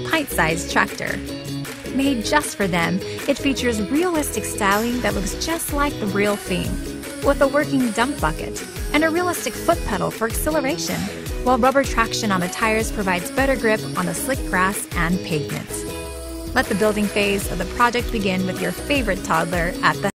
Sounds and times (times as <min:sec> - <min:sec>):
Speech: 0:00.0 - 0:01.2, 0:01.9 - 0:15.8, 0:16.6 - 0:20.1
Music: 0:00.0 - 0:20.1.